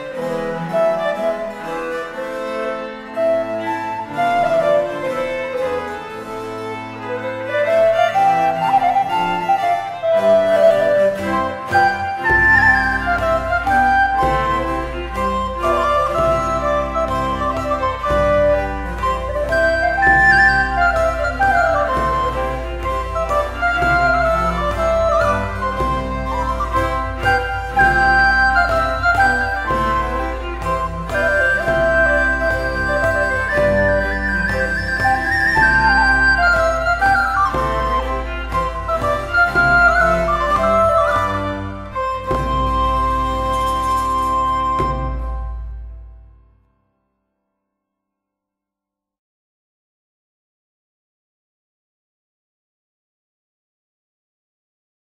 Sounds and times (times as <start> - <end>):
Inside, large room or hall: 0.0 - 46.7
Music: 0.0 - 47.7.